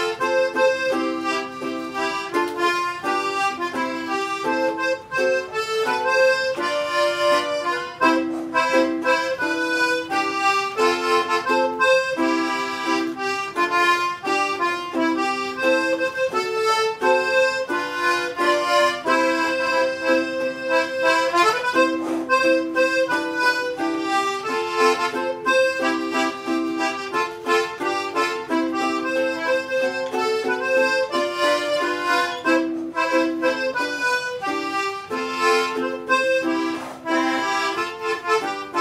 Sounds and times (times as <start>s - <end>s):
Accordion: 0.0s - 38.8s
Ukulele: 0.0s - 38.8s.